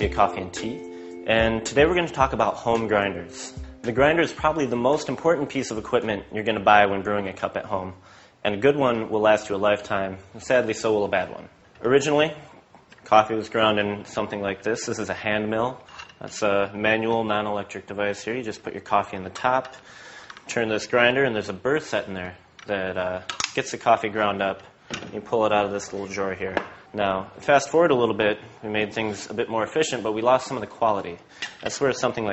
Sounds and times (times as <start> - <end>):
Speech: 0.0 - 19.8, 20.5 - 32.3.